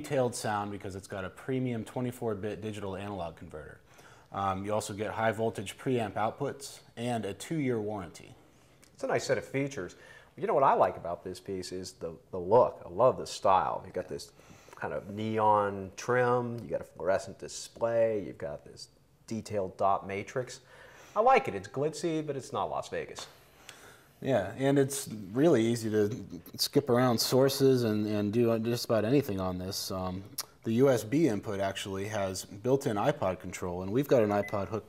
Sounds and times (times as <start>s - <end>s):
Speech: 0.0s - 23.4s, 24.2s - 34.8s.